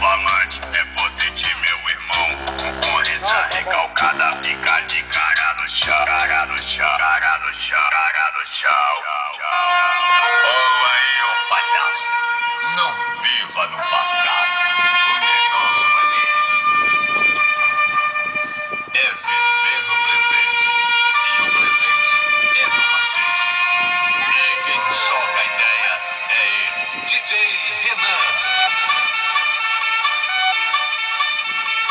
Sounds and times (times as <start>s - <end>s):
Speech: 10.2s - 12.1s, 12.7s - 16.3s, 21.6s - 23.2s, 24.2s - 28.4s
Music: 23.0s - 31.9s.